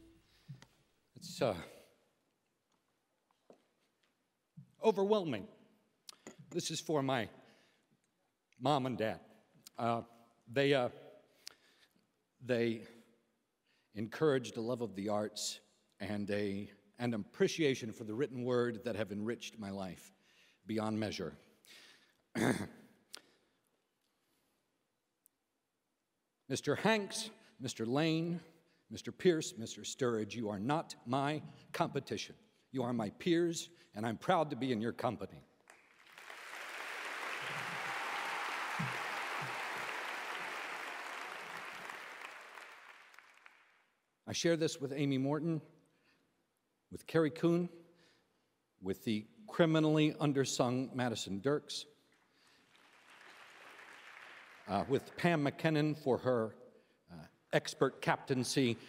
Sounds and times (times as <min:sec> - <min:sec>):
Narration, monologue: 0:00.0 - 0:36.1, 0:42.8 - 0:58.8
Male speech, man speaking: 0:01.2 - 0:01.9, 0:04.8 - 0:05.5, 0:06.6 - 0:07.3, 0:08.6 - 0:09.2, 0:09.8 - 0:11.0, 0:12.4 - 0:13.0, 0:14.0 - 0:20.1, 0:20.7 - 0:21.4, 0:26.5 - 0:35.4, 0:44.3 - 0:45.7, 0:47.0 - 0:47.8, 0:48.8 - 0:51.9, 0:54.7 - 0:56.6, 0:57.2 - 0:58.8.